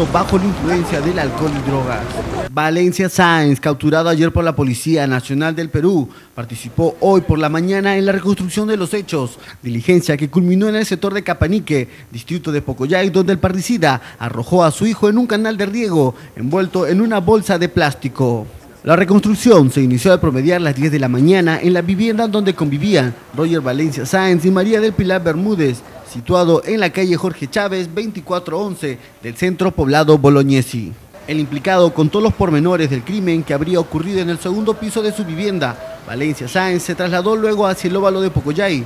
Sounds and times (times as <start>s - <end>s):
Speech: 0.0s - 38.8s.